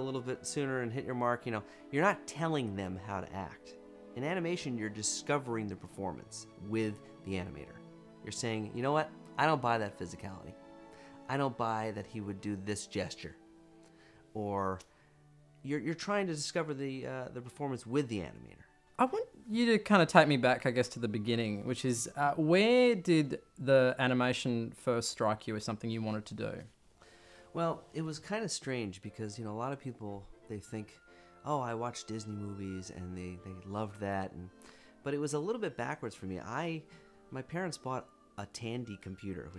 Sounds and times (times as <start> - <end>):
Speech: 0.0 - 10.6, 11.3 - 13.4, 14.4 - 14.8, 15.6 - 26.7, 27.6 - 34.5, 35.1 - 39.5.